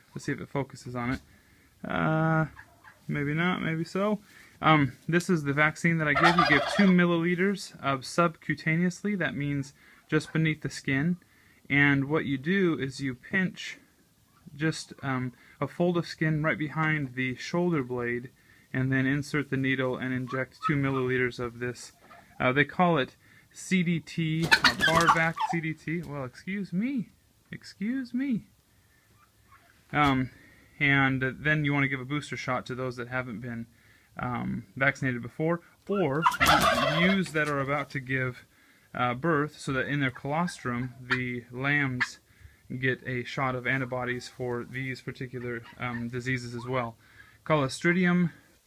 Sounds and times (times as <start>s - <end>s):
Livestock, farm animals, working animals: 0.0s - 4.2s, 4.8s - 7.7s, 8.7s - 23.0s, 24.3s - 26.6s, 28.6s - 32.4s, 34.2s - 38.4s, 39.0s - 48.3s
Speech: 0.1s - 1.2s, 1.8s - 13.8s, 14.5s - 28.5s, 29.9s - 48.5s.